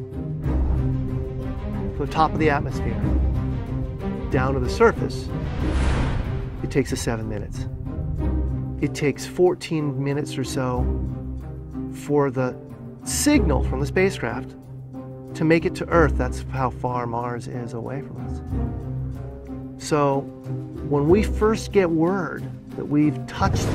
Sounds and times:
Music: 0.0 - 23.7
Speech: 2.0 - 3.0, 4.3 - 5.3, 6.6 - 7.7, 8.8 - 10.9, 12.0 - 14.6, 15.4 - 18.4, 19.8 - 23.7.

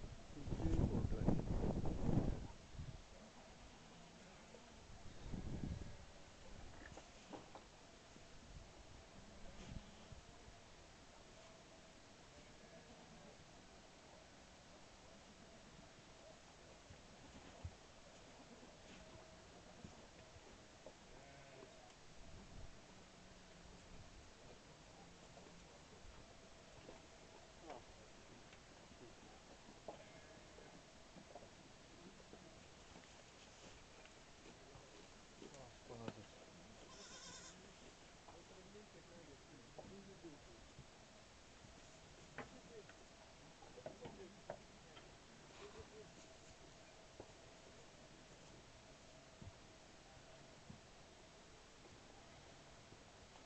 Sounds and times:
Goat: 3.2 - 53.4.

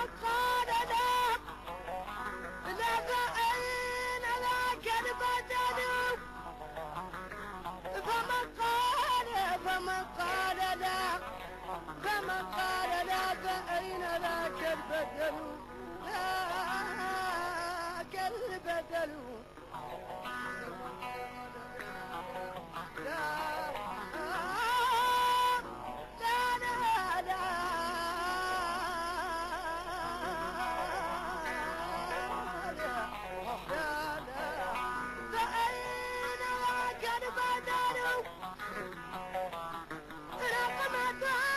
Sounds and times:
Independent music: 0.0 - 41.5.

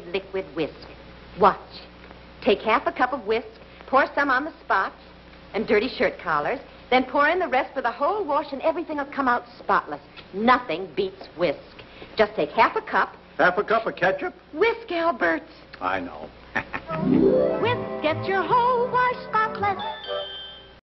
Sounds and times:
Music: 16.9 - 20.8.

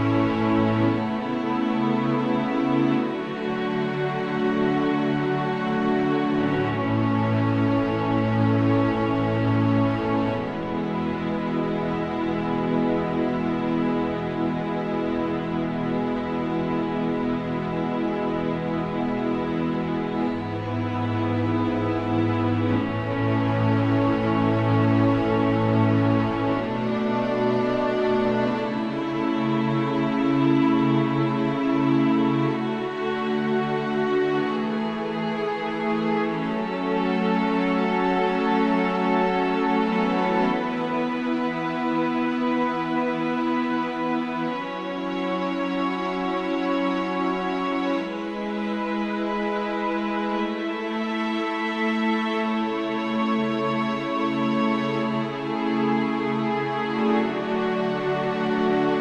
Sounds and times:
Background music: 0.0 - 59.0.

